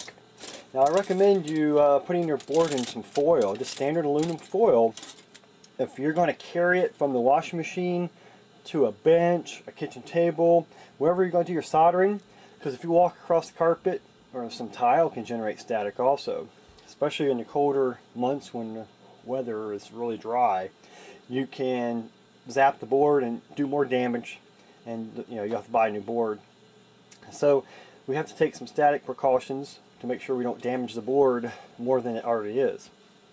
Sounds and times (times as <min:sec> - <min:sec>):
Speech: 0:00.7 - 0:05.0, 0:05.8 - 0:20.7, 0:21.3 - 0:26.4, 0:27.2 - 0:33.0.